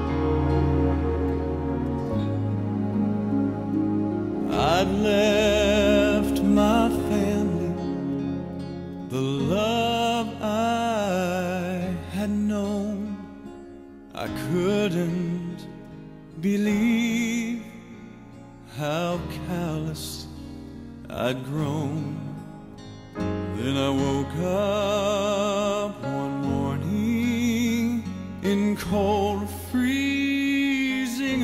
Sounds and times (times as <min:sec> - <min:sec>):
Music: 0:00.0 - 0:31.4.